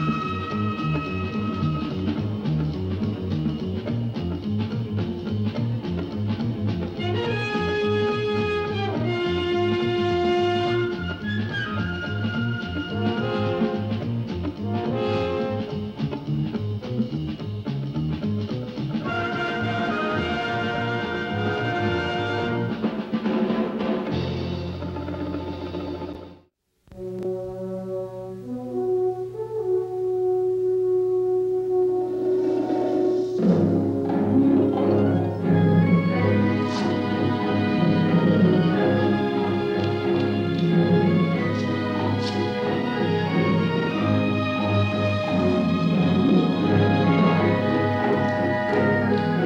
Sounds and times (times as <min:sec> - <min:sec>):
Music: 0:00.0 - 0:49.4.